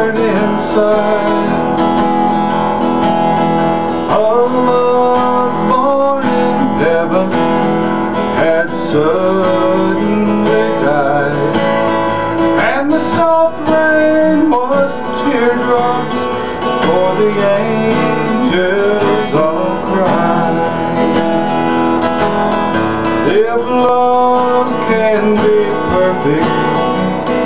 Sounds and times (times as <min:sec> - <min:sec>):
Music: 0:00.0 - 0:27.4.